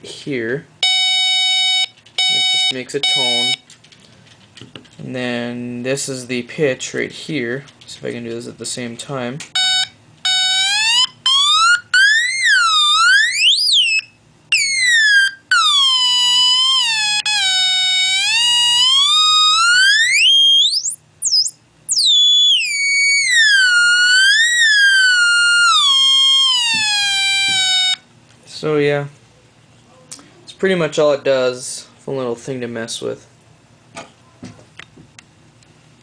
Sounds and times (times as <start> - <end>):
Speech: 0.0 - 0.7, 2.7 - 3.6, 5.0 - 9.5, 28.5 - 33.3.